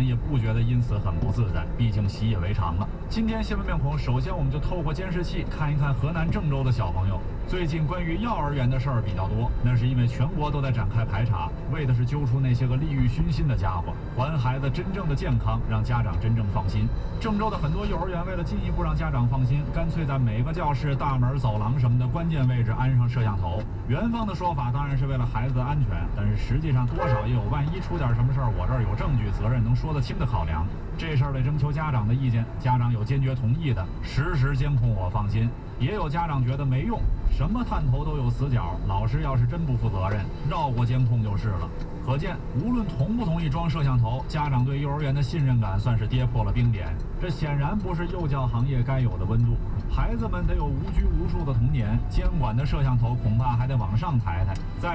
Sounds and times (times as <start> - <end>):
Speech: 0.0 - 54.9
Vehicle: 0.0 - 54.9.